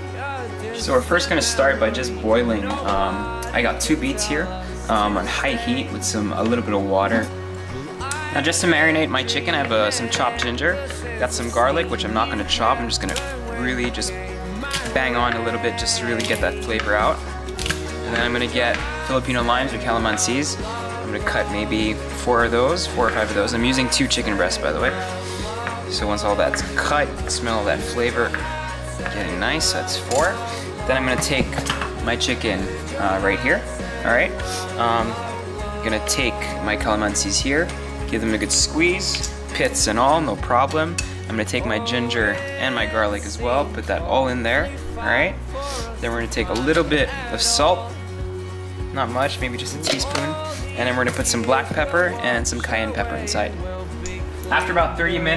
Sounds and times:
Music: 0.0s - 55.3s
Speech: 0.8s - 17.2s, 18.1s - 25.0s, 25.9s - 28.4s, 29.0s - 35.2s, 35.8s - 47.9s, 48.9s - 53.6s, 54.5s - 55.3s.

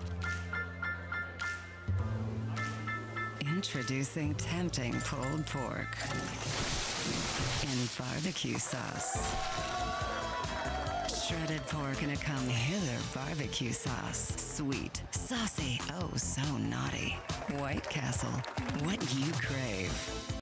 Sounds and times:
Music: 0.0s - 20.4s
Speech: 3.4s - 6.4s, 7.6s - 9.2s, 11.1s - 20.0s.

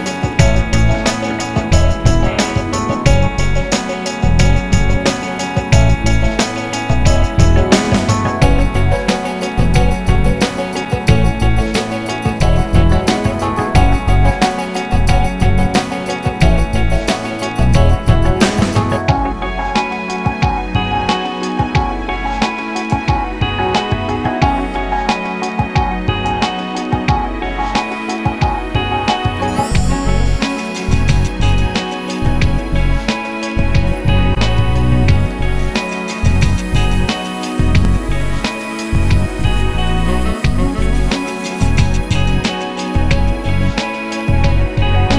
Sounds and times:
Music: 0.0s - 45.1s.

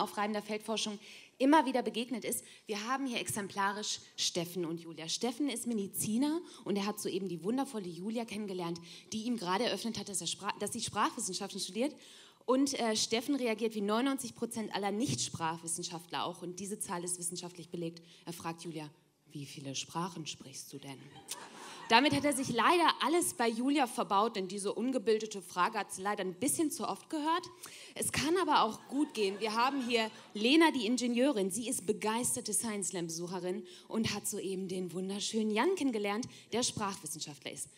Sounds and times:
Speech: 0.0s - 21.2s, 21.9s - 37.7s.

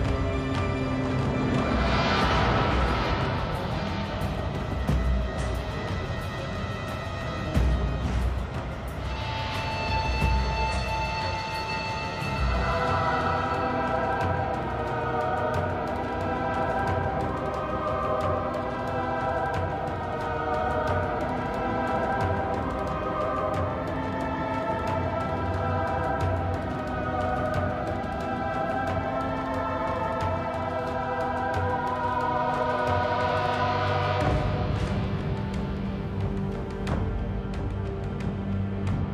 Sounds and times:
Scary music: 0.0s - 39.1s
Soundtrack music: 0.0s - 39.1s.

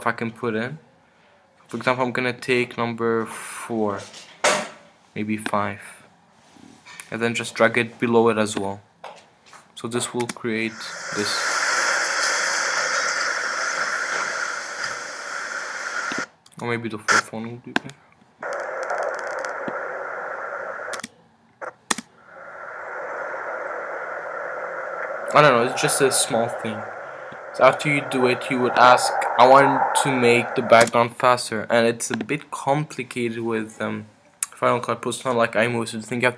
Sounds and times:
Speech: 0.0s - 0.8s, 1.7s - 4.1s, 5.2s - 6.1s, 7.0s - 8.9s, 9.8s - 11.5s, 16.6s - 18.0s, 25.3s - 26.9s, 27.6s - 36.3s.

